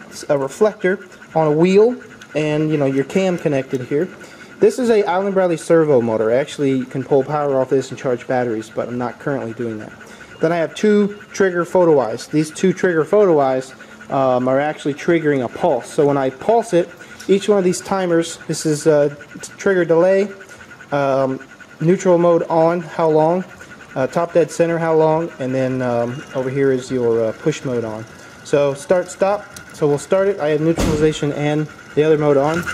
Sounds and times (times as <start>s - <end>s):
Speech: 0.2s - 32.7s.